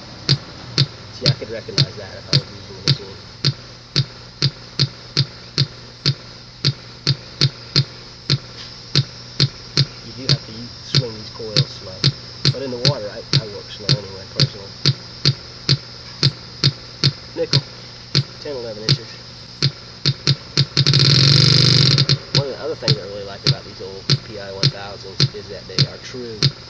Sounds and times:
Speech: 1.2 - 3.2, 10.0 - 14.8, 17.4 - 17.7, 18.4 - 19.2, 22.4 - 26.5.

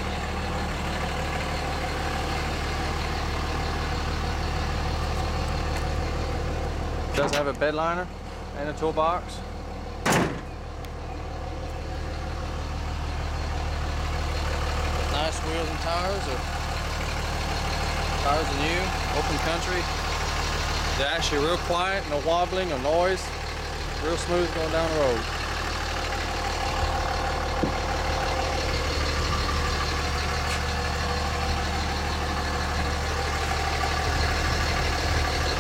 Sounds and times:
Heavy engine (low frequency): 0.0 - 35.6
Outside, rural or natural: 0.0 - 35.6
Truck: 0.0 - 35.6.

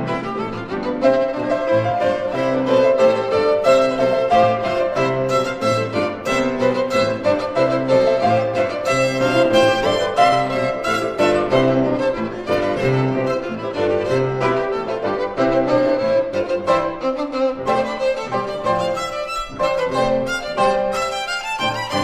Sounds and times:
Violin, fiddle: 0.0 - 22.0.

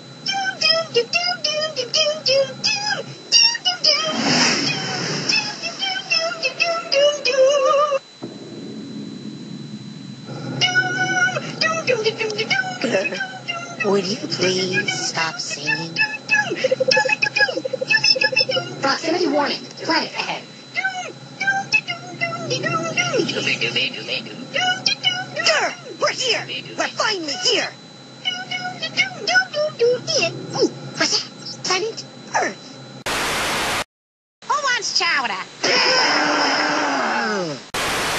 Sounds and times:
Speech: 10.6 - 32.6, 34.5 - 36.0.

